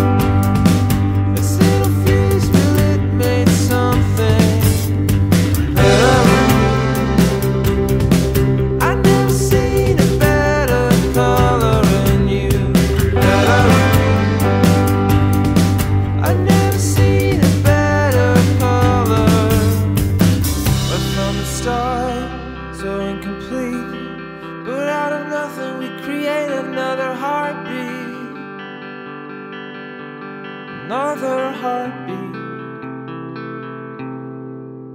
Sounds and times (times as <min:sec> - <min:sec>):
Effects unit: 0:00.0 - 0:34.9.